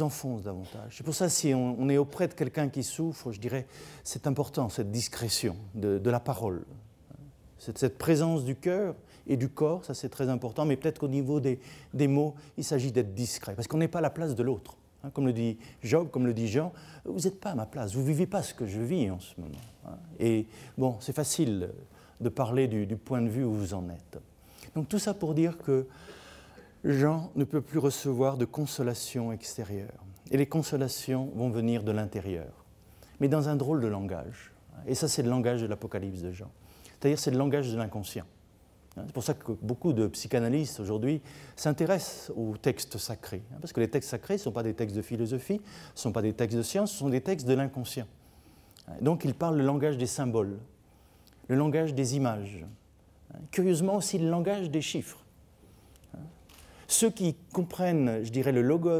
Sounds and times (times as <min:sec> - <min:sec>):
Speech: 0:00.0 - 0:24.2, 0:24.8 - 0:25.9, 0:26.8 - 0:32.6, 0:33.2 - 0:48.1, 0:48.8 - 0:50.7, 0:51.5 - 0:55.3, 0:56.1 - 0:58.9.